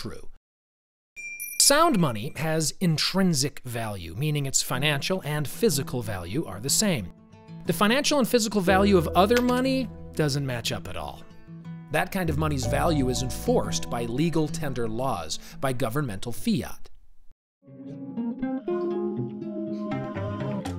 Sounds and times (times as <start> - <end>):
Speech: 0.0 - 0.4, 1.6 - 7.1, 7.7 - 11.2, 11.9 - 16.9
Music: 5.4 - 15.8, 17.6 - 20.7.